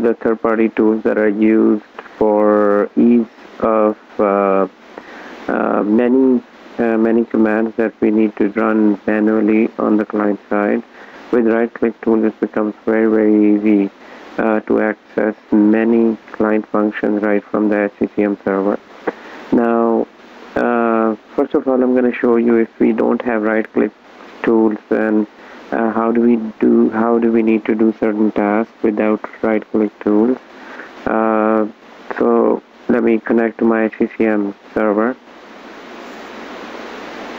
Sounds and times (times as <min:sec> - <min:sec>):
Speech: 0:00.0 - 0:04.7, 0:05.5 - 0:30.4, 0:31.0 - 0:35.2.